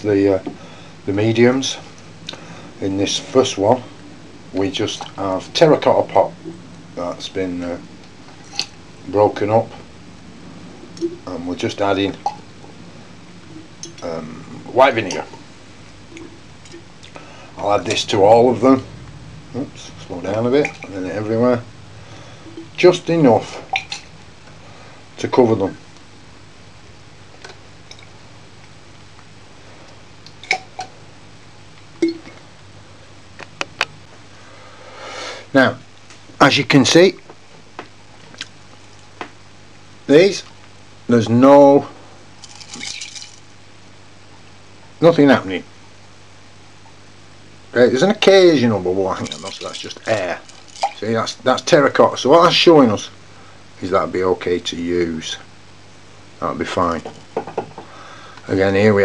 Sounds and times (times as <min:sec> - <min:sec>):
Speech: 0:00.0 - 0:00.5, 0:01.1 - 0:01.9, 0:02.8 - 0:03.9, 0:04.5 - 0:06.4, 0:07.0 - 0:07.8, 0:09.0 - 0:09.8, 0:11.2 - 0:12.2, 0:14.0 - 0:15.4, 0:17.6 - 0:18.9, 0:19.6 - 0:21.7, 0:22.8 - 0:23.6, 0:25.2 - 0:25.8, 0:35.5 - 0:35.8, 0:36.4 - 0:37.2, 0:40.1 - 0:40.5, 0:41.1 - 0:42.0, 0:45.0 - 0:45.7, 0:47.7 - 0:50.4, 0:51.0 - 0:53.2, 0:53.8 - 0:55.5, 0:56.4 - 0:57.1, 0:58.5 - 0:59.0
Inside, small room: 0:00.0 - 0:59.0.